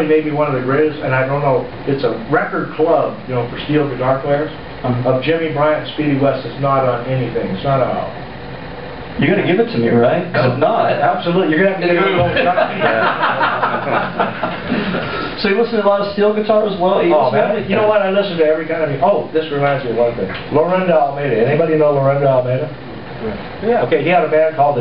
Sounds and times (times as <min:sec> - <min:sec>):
Speech: 0:00.0 - 0:08.2, 0:09.2 - 0:13.2, 0:15.4 - 0:24.8.